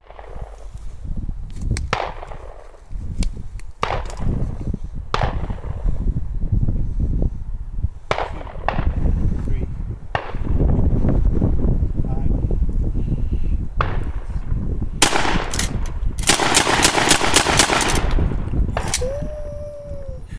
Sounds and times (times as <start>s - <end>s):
Speech: 9.5s - 9.7s, 12.0s - 12.4s.